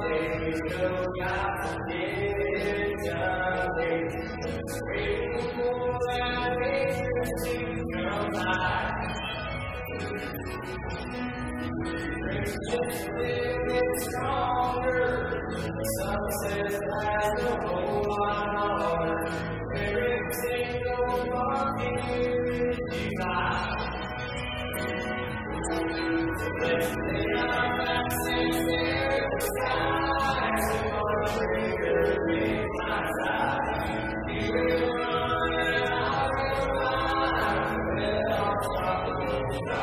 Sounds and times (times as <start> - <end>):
Music: 0.0 - 39.8.